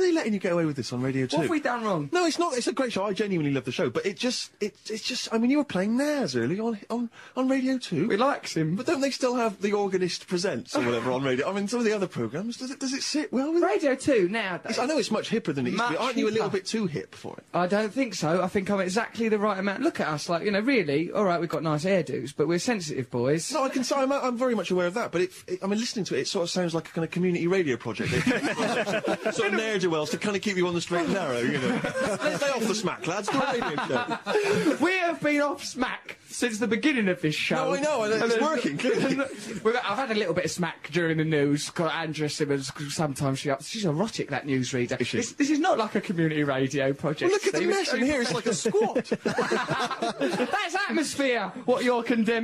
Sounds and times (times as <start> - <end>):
Speech: 0.0 - 52.4.